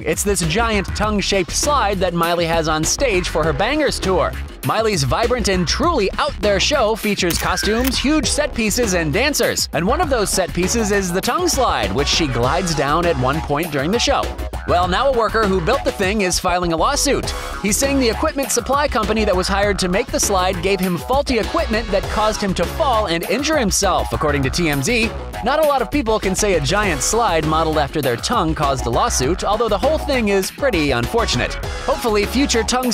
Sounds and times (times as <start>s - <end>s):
Music: 0.0s - 32.9s
Speech: 0.0s - 32.9s.